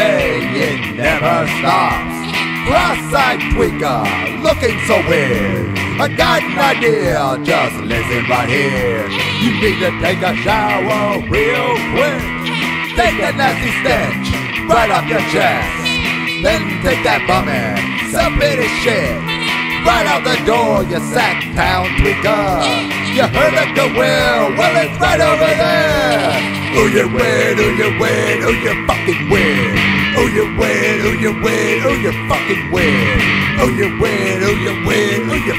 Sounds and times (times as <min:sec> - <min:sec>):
Music: 0:00.0 - 0:35.5.